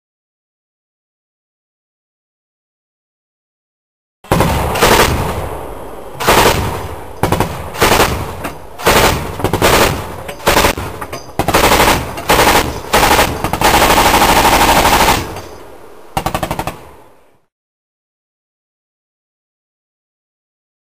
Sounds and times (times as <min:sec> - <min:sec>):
Machine gun: 0:04.3 - 0:05.4, 0:06.2 - 0:15.5, 0:16.2 - 0:16.9.